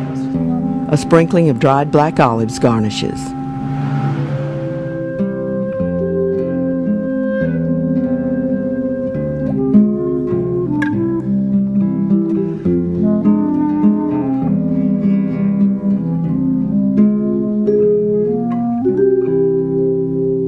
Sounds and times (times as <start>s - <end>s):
Double bass: 0.0s - 20.4s.